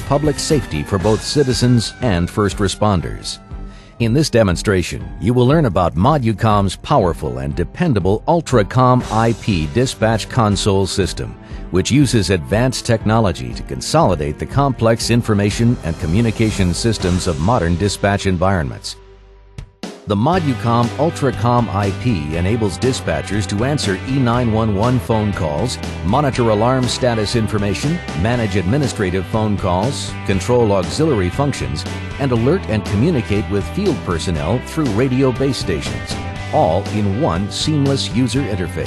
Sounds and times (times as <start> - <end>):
Speech: 0.0 - 3.4, 4.0 - 19.0, 20.1 - 38.8
Music: 0.0 - 38.8.